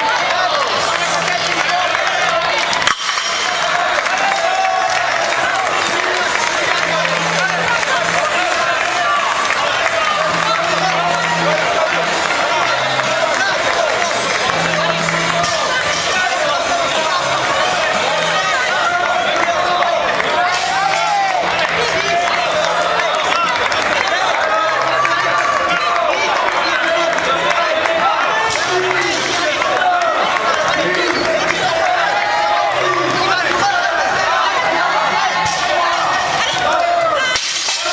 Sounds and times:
Music: 0.0s - 37.9s
Speech: 3.4s - 37.9s.

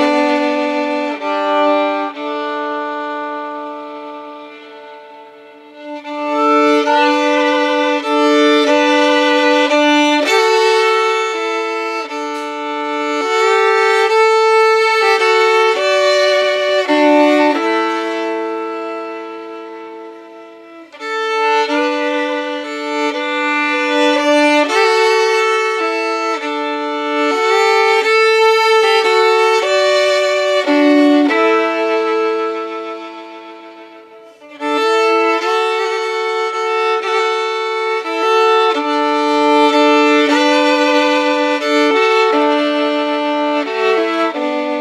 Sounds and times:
Violin, fiddle: 0.0s - 44.8s.

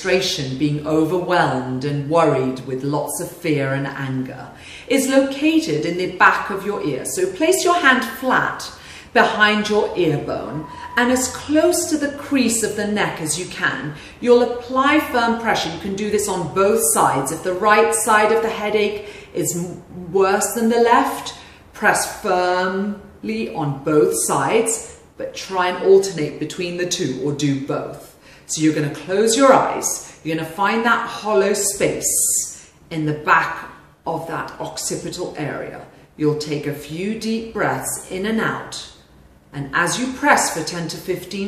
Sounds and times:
Speech: 0.0s - 41.4s.

